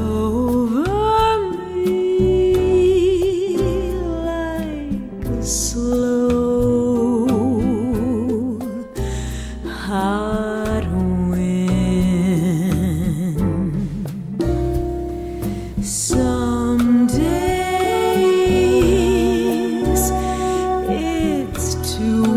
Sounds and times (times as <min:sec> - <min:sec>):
Music: 0:00.0 - 0:22.3.